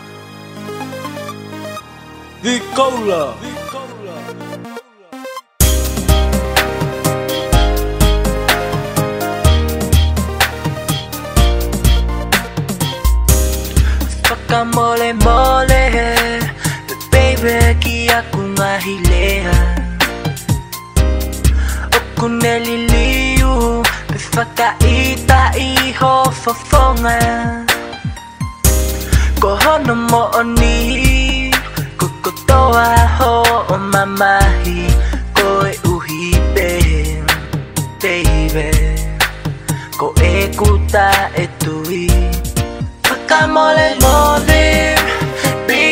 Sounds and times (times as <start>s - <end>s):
Rhythm and blues: 0.0s - 45.9s.